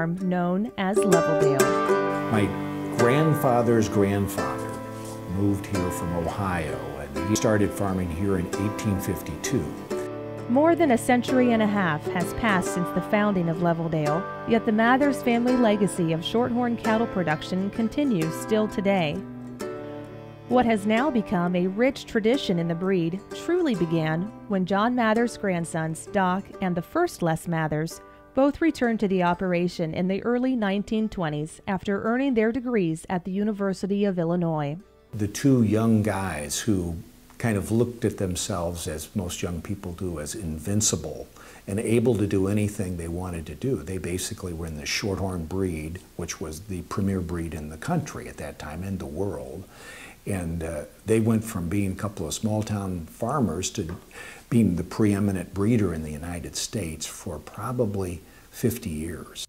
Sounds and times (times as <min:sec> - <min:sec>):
Speech: 0:00.0 - 0:01.7, 0:02.3 - 0:04.7, 0:05.3 - 0:09.8, 0:10.5 - 0:19.2, 0:20.5 - 0:49.7, 0:50.3 - 0:59.4
Music: 0:00.0 - 0:59.4.